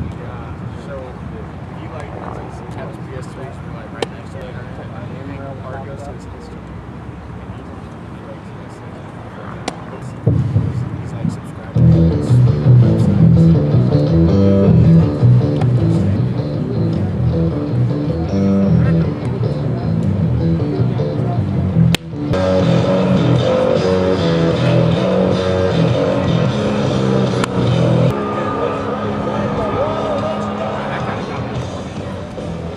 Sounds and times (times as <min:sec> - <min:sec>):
Outside, urban or manmade: 0:00.0 - 0:32.7
Music: 0:11.8 - 0:32.7.